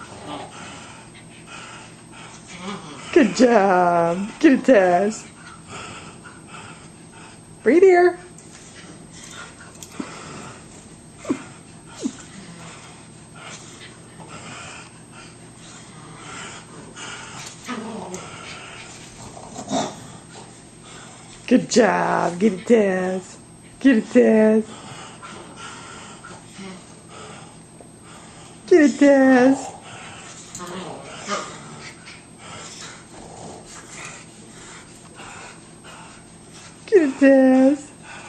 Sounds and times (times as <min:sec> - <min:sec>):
Speech: 0:03.1 - 0:05.2, 0:07.7 - 0:08.3, 0:21.5 - 0:24.7, 0:28.7 - 0:29.7, 0:36.9 - 0:37.9.